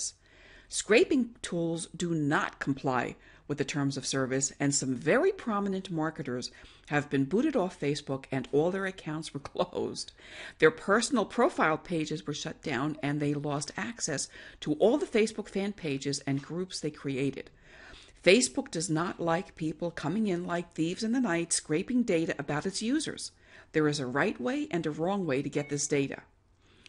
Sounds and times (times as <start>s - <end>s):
Speech: 0.0s - 17.5s, 18.2s - 26.3s.